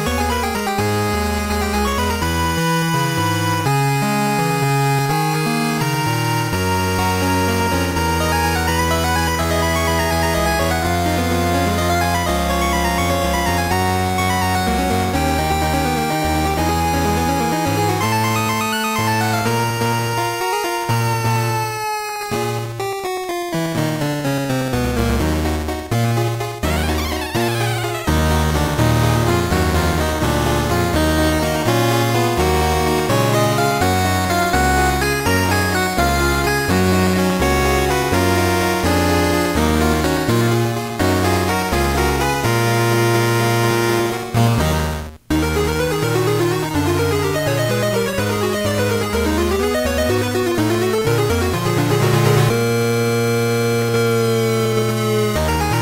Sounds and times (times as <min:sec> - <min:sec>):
Music: 0:00.0 - 0:55.8.